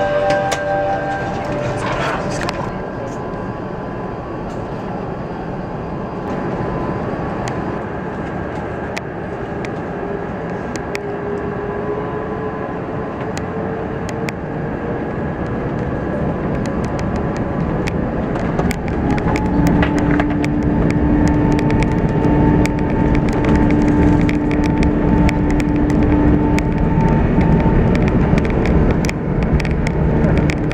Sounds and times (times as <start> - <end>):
Aircraft: 0.0 - 30.7.